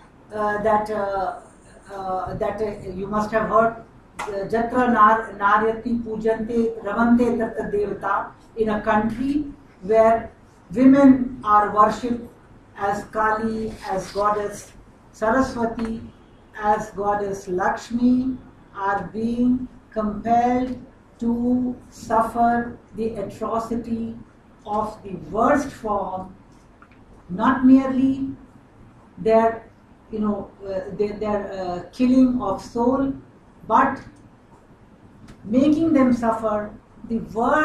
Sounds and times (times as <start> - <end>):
Narration, monologue: 0.0 - 37.6
Female speech, woman speaking: 0.3 - 16.0, 16.6 - 26.3, 27.3 - 28.4, 29.2 - 34.1, 35.4 - 37.6.